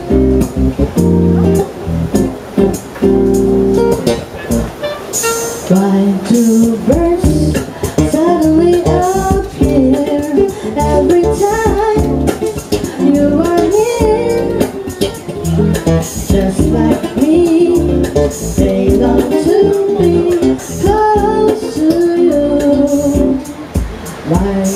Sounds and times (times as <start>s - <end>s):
Female singing: 5.7s - 14.9s, 16.2s - 23.6s, 24.2s - 24.7s.